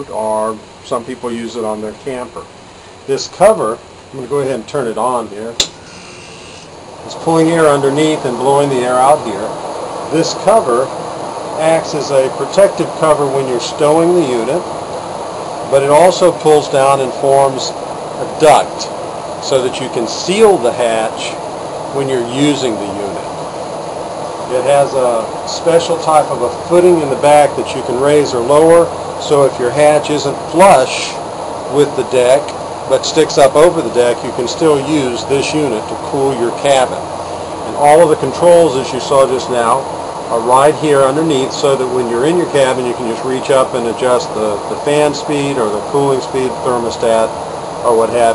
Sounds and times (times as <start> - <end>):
Speech: 0.0 - 2.5, 3.1 - 5.7, 7.1 - 10.9, 11.6 - 14.7, 15.7 - 23.3, 24.5 - 48.3.